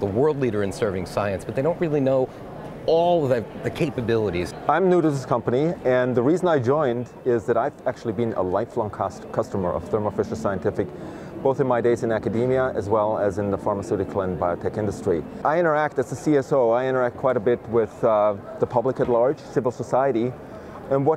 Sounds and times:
Speech: 0.0 - 21.1.

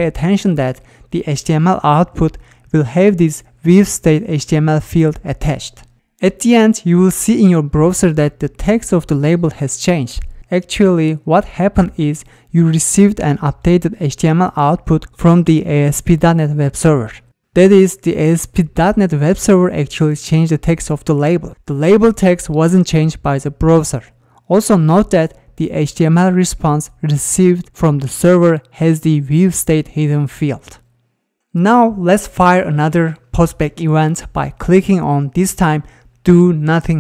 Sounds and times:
Narration, monologue: 0.0 - 37.0.

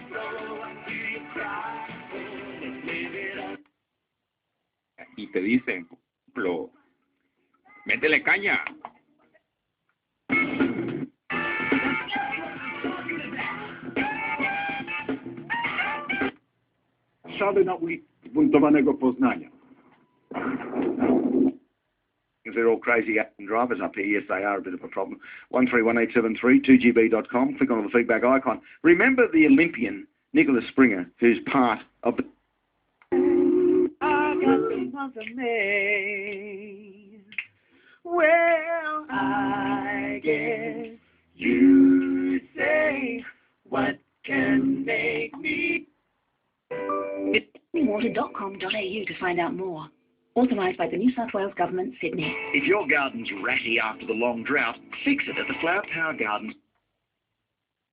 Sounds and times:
Music: 0.0 - 3.7, 10.3 - 16.5, 46.7 - 48.8, 52.0 - 56.5
Speech: 17.3 - 19.5, 22.5 - 32.4, 47.7 - 56.6.

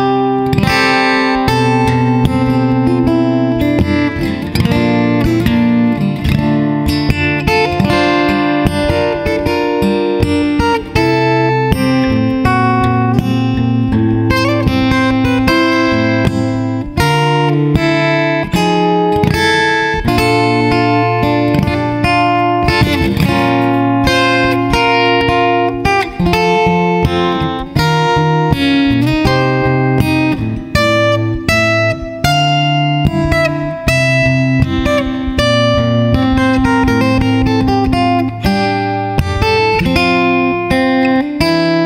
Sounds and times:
Acoustic guitar: 0.0 - 41.8
Strum: 0.0 - 41.8.

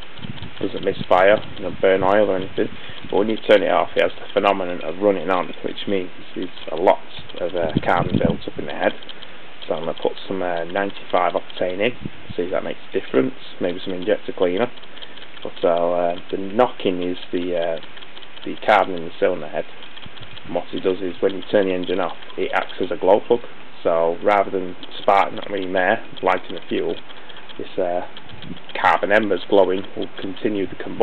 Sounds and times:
Speech: 0.6 - 9.0, 9.7 - 14.8, 15.4 - 17.8, 18.5 - 19.7, 20.5 - 27.0, 27.6 - 28.1, 28.8 - 31.0.

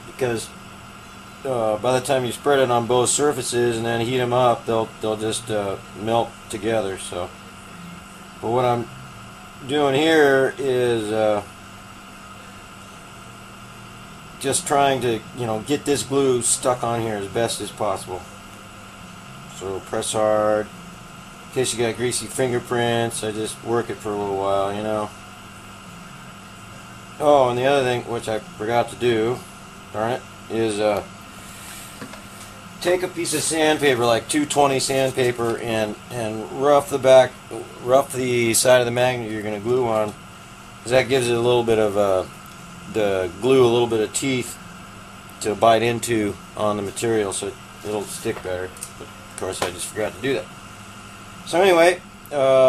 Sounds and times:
Speech: 0.0 - 0.6, 1.4 - 7.3, 8.4 - 8.9, 9.6 - 11.5, 14.4 - 18.3, 19.5 - 20.7, 21.5 - 25.1, 27.2 - 31.1, 32.8 - 40.2, 40.8 - 42.3, 42.9 - 44.6, 45.4 - 50.5, 51.4 - 52.6.

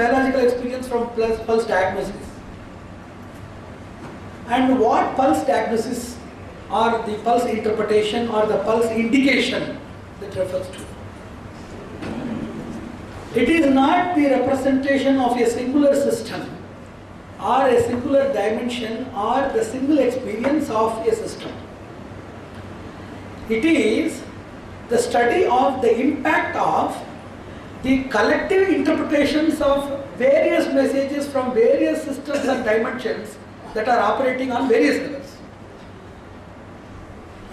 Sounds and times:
Speech: 0.0 - 2.4, 4.5 - 11.0, 13.3 - 16.6, 17.4 - 21.6, 23.5 - 27.1, 27.8 - 35.4.

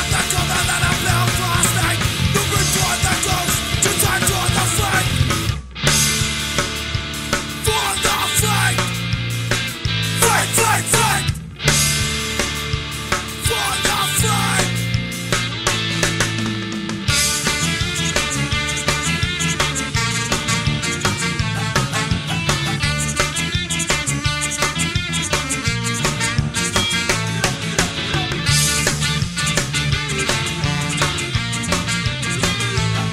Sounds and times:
Progressive rock: 0.0 - 33.1.

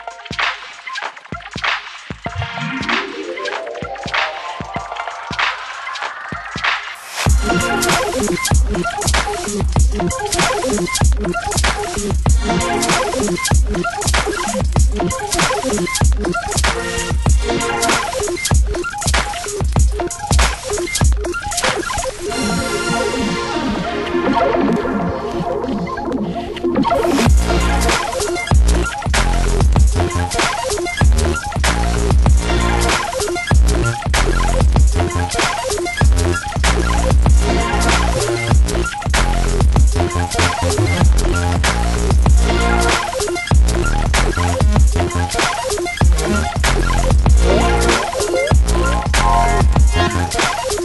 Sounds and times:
Drum and bass: 0.0 - 50.8.

